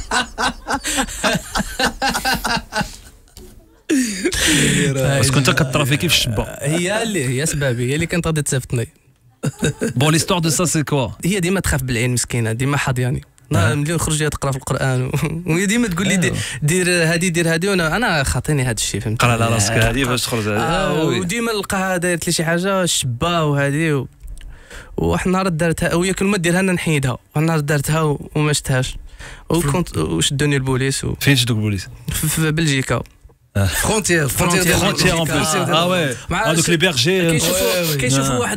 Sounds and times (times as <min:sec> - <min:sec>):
Speech: 0:04.6 - 0:08.9, 0:10.0 - 0:24.1, 0:25.0 - 0:38.5.